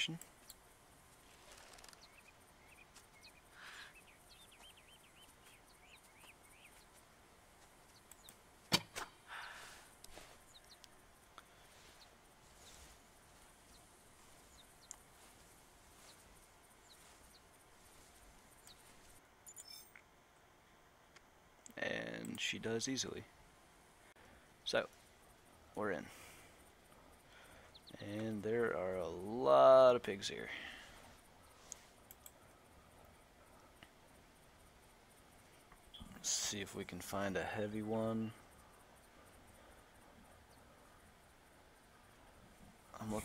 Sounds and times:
Speech: 0.0 - 0.2, 21.7 - 23.3, 25.8 - 26.1, 28.0 - 30.8, 36.0 - 38.4, 43.0 - 43.2
Outside, rural or natural: 0.0 - 43.2.

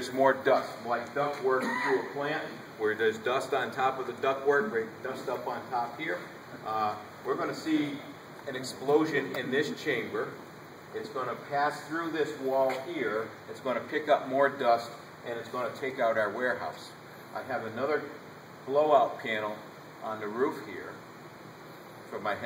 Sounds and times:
Speech: 0.0 - 21.0, 22.1 - 22.4.

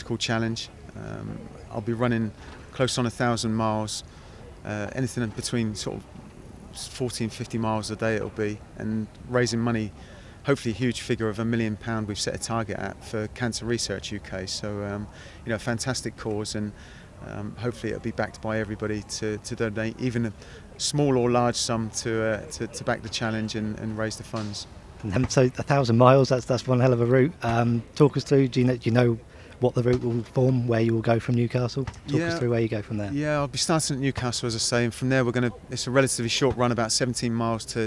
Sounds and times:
Speech: 0.0 - 4.0, 4.6 - 6.1, 6.7 - 37.8.

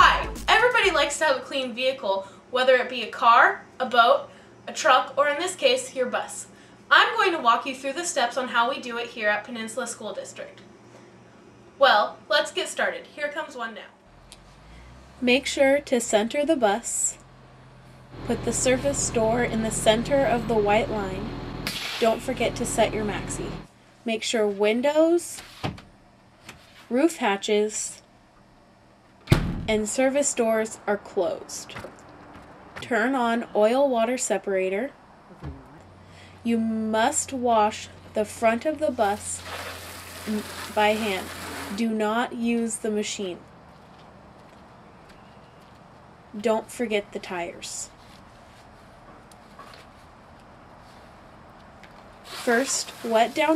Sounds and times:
Speech: 0.0 - 10.6, 11.8 - 13.9, 15.2 - 17.2, 18.2 - 21.3, 22.0 - 25.4, 26.9 - 28.0, 29.7 - 31.8, 32.8 - 35.8, 36.4 - 39.4, 40.3 - 43.4, 46.4 - 47.9, 52.5 - 53.5
Bus: 14.1 - 23.7.

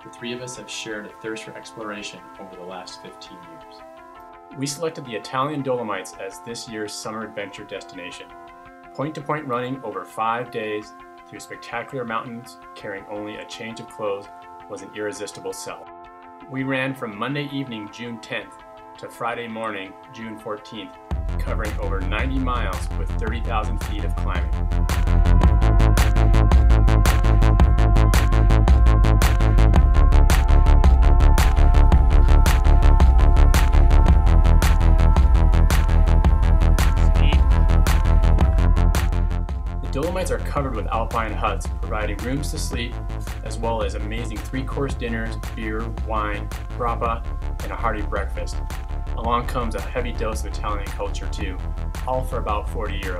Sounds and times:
Speech: 0.0 - 3.8, 4.6 - 8.3, 9.0 - 15.9, 16.5 - 24.5, 39.9 - 48.6, 49.2 - 53.1
Music: 0.0 - 53.1.

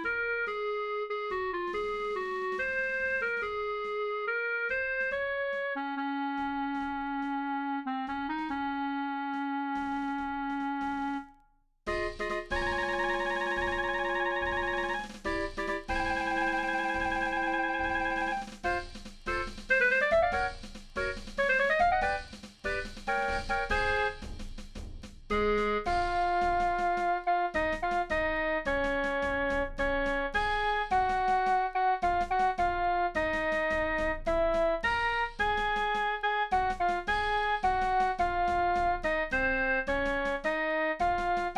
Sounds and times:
Classical music: 12.0 - 20.5.

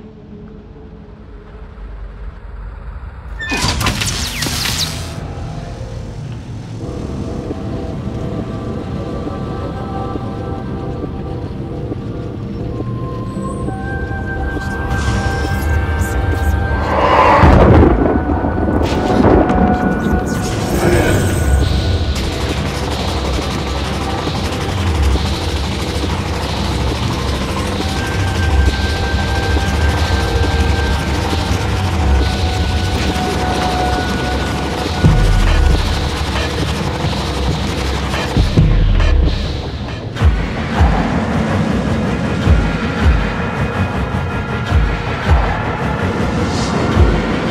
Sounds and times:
Music: 0.0 - 47.5.

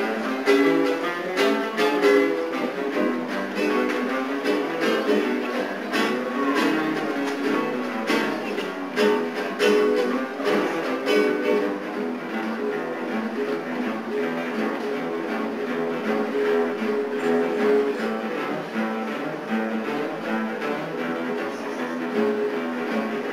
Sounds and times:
Acoustic guitar: 0.0 - 23.3
Strum: 0.0 - 23.3.

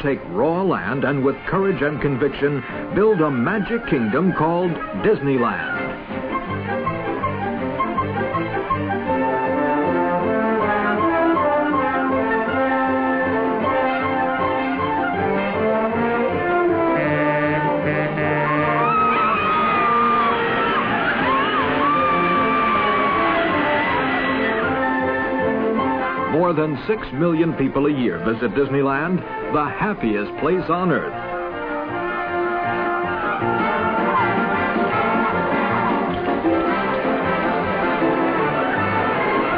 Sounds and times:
French horn: 0.1 - 39.5.

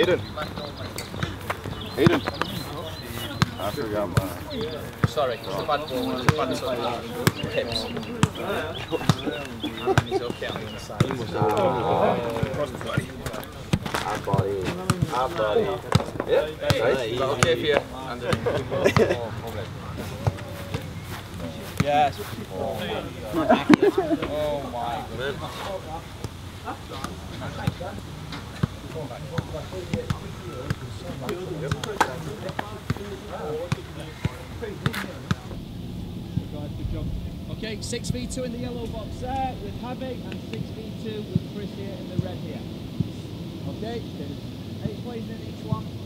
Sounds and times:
Speech: 0.0 - 35.6, 36.4 - 42.7.

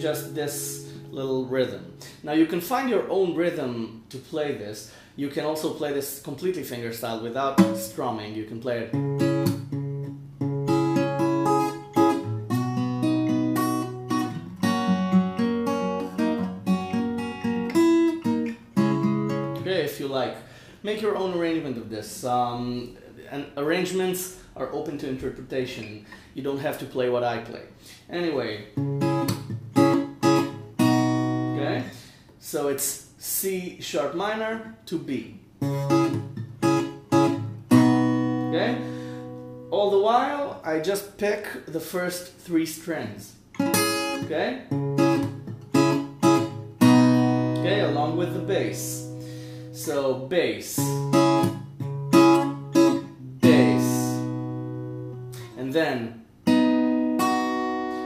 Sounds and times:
Acoustic guitar: 0.0 - 3.1, 7.5 - 8.1, 8.7 - 21.0, 27.8 - 32.2, 35.6 - 40.3, 43.5 - 58.0.

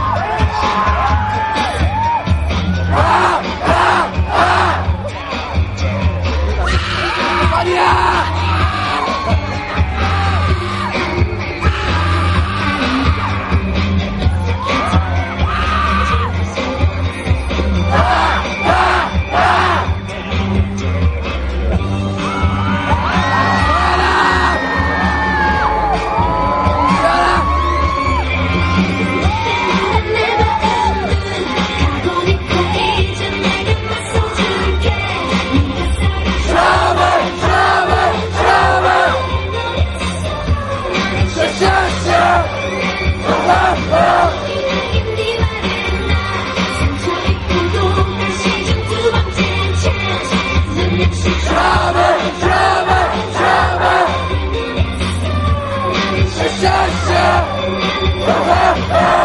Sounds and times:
Music: 0.0 - 59.2.

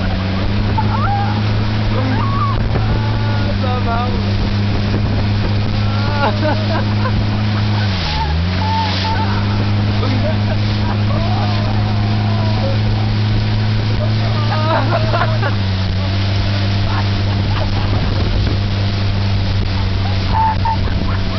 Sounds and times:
Boat, Water vehicle: 0.0 - 21.3.

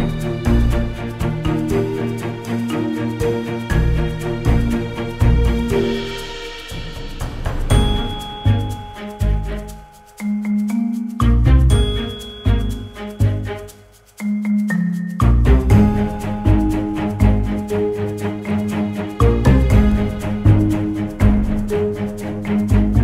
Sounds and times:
Music: 0.0 - 23.0.

